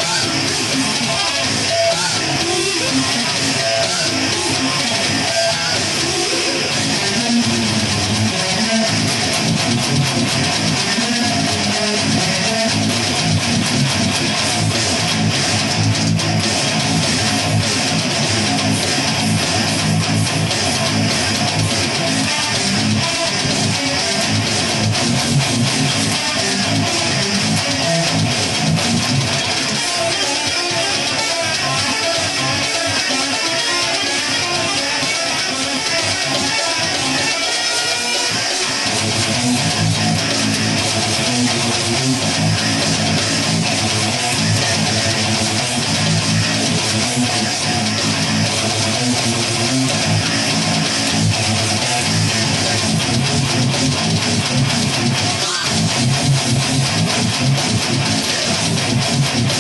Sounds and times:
Electric guitar: 0.0s - 59.6s.

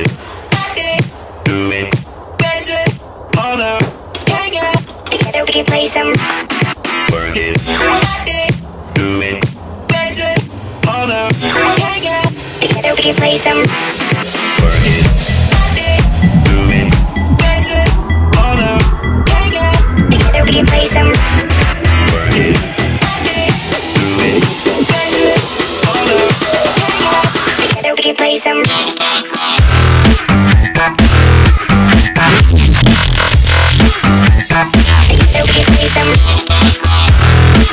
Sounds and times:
Music: 0.0s - 37.7s.

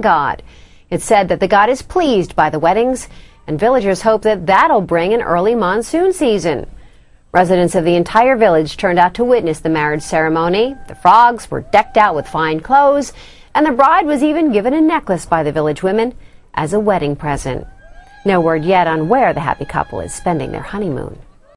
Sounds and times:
Speech: 0.0s - 6.7s, 7.4s - 17.6s, 18.3s - 21.3s.

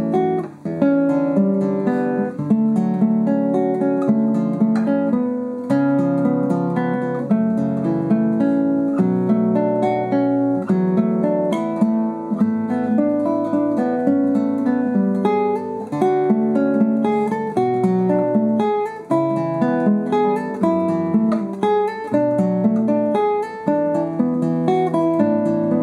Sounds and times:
Guitar: 0.0s - 25.8s.

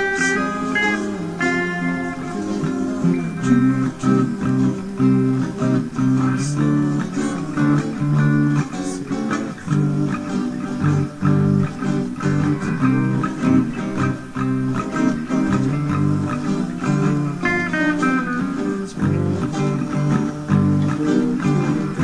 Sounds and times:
Strum: 0.0s - 22.0s.

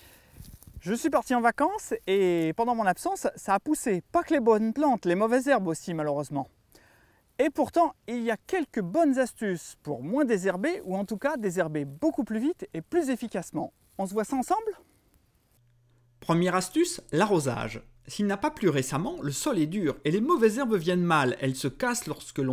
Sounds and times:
Speech: 0.8s - 6.5s, 7.4s - 14.8s, 16.2s - 22.5s.

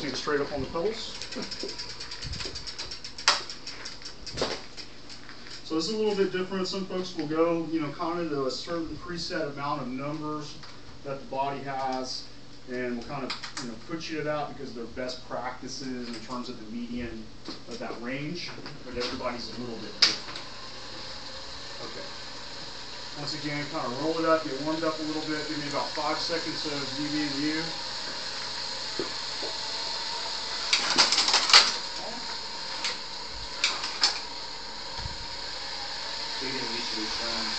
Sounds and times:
Speech: 0.0s - 1.2s, 5.7s - 20.2s, 23.2s - 27.8s, 36.4s - 37.5s
Bicycle: 0.0s - 5.7s, 18.9s - 37.5s.

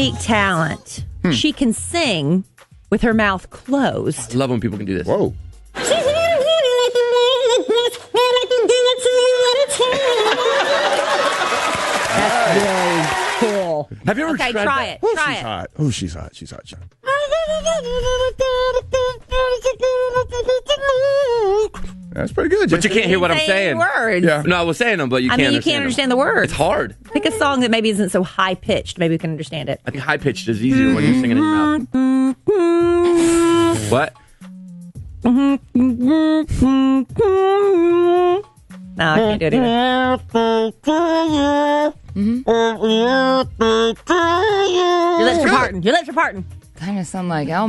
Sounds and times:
Music: 0.0s - 47.6s
Female singing: 5.8s - 10.7s, 17.1s - 21.9s, 25.3s - 29.1s, 30.8s - 33.8s, 35.3s - 46.4s
Speech: 22.2s - 27.8s, 29.9s - 31.8s, 39.0s - 40.2s, 44.3s - 47.6s.

